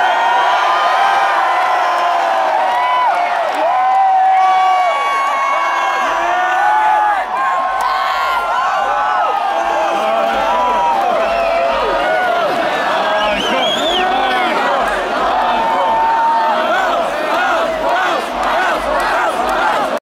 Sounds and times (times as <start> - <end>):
Speech: 9.6 - 20.0.